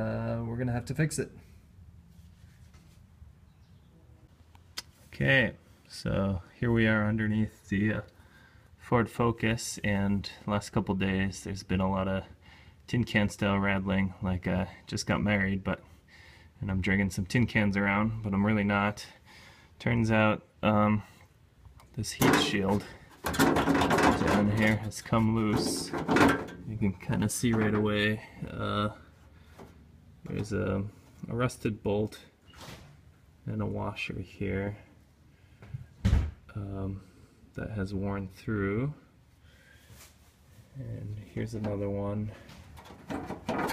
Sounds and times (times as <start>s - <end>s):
Speech: 0.0s - 1.4s, 5.1s - 8.1s, 8.8s - 12.3s, 12.9s - 15.9s, 16.6s - 19.2s, 19.8s - 21.1s, 22.0s - 23.0s, 23.8s - 26.0s, 26.7s - 29.1s, 30.2s - 32.3s, 33.4s - 34.9s, 36.5s - 39.1s, 40.7s - 42.5s.